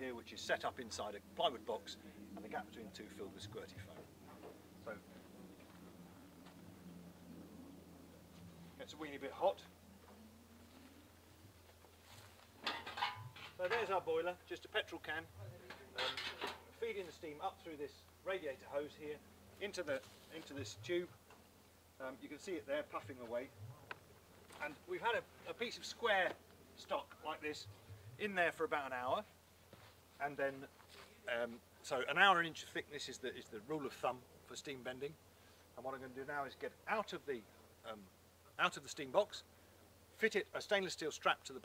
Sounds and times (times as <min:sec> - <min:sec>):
Speech: 0:00.0 - 0:04.1, 0:08.8 - 0:09.8, 0:13.6 - 0:21.2, 0:22.0 - 0:24.0, 0:24.6 - 0:29.3, 0:30.2 - 0:30.7, 0:31.3 - 0:35.2, 0:35.8 - 0:39.5, 0:40.2 - 0:41.6.